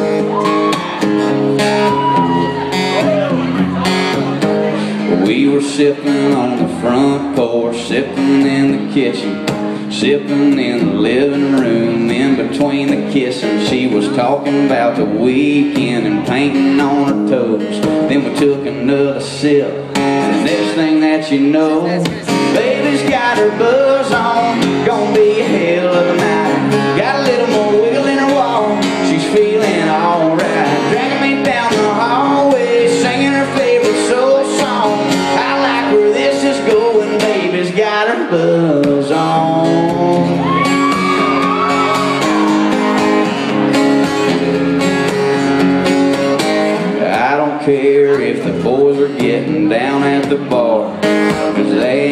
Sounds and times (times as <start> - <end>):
Music: 0.0 - 52.1.